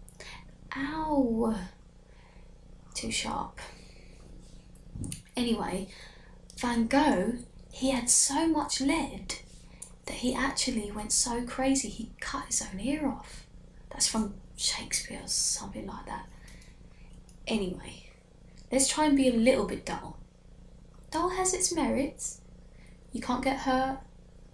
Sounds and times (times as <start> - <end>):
Narration, monologue: 0.0 - 24.5.